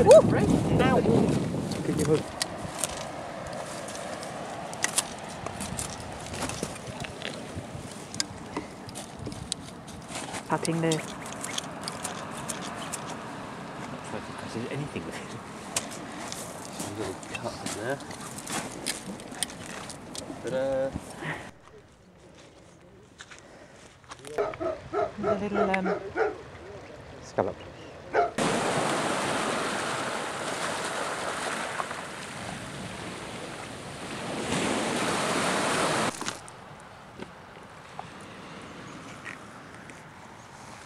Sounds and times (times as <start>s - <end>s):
Outside, rural or natural: 0.0s - 40.8s.